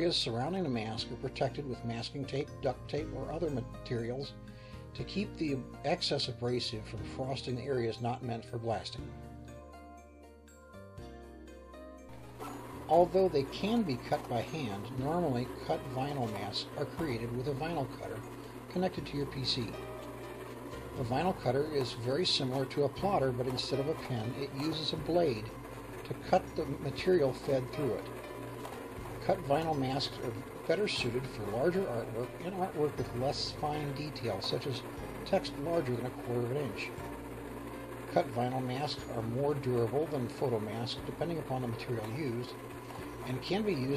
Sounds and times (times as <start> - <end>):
Speech: 0.0 - 4.3, 5.0 - 9.0, 12.9 - 19.8, 21.0 - 25.5, 26.1 - 28.1, 29.2 - 37.0, 38.1 - 42.6, 43.2 - 43.9
Music: 0.0 - 43.9.